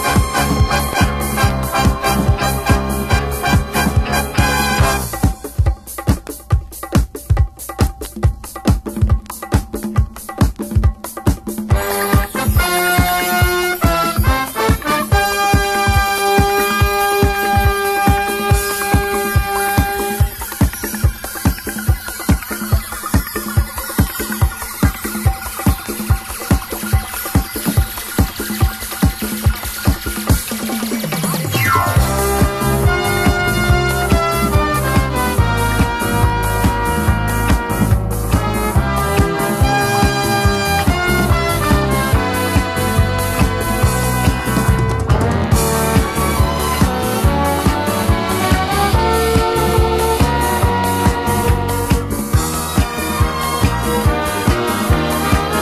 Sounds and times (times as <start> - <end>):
Disco: 0.0 - 55.6.